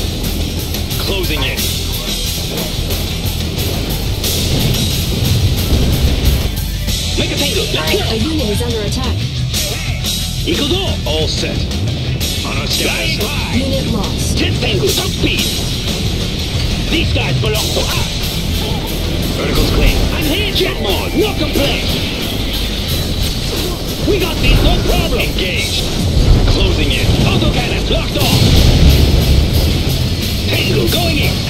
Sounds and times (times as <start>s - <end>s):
Music: 0.0s - 31.5s
Speech: 1.0s - 2.8s, 7.2s - 9.8s, 10.5s - 11.6s, 12.4s - 15.6s, 16.9s - 21.9s, 23.6s - 28.4s, 30.4s - 31.5s.